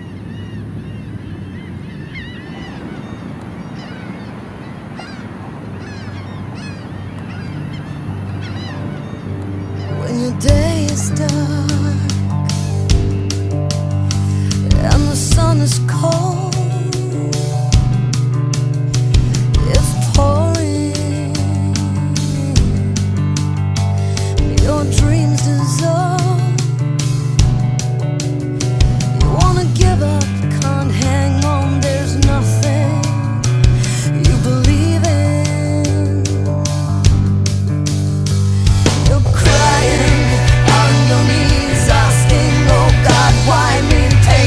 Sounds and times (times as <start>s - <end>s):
Soul music: 6.0s - 44.4s
Independent music: 7.2s - 44.4s
Background music: 7.4s - 44.4s
Soundtrack music: 8.4s - 15.6s, 16.6s - 34.9s, 36.3s - 44.4s.